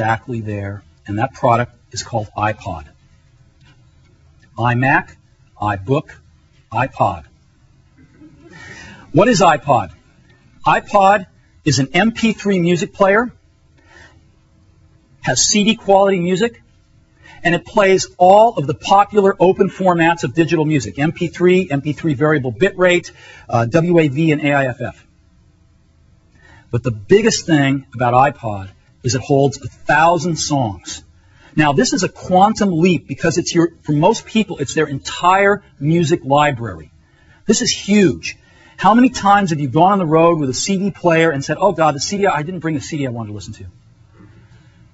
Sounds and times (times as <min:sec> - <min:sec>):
Speech: 0:00.0 - 0:03.0, 0:04.6 - 0:07.3, 0:09.1 - 0:10.0, 0:10.6 - 0:13.4, 0:15.2 - 0:16.6, 0:17.4 - 0:25.1, 0:26.7 - 0:36.9, 0:37.5 - 0:43.8.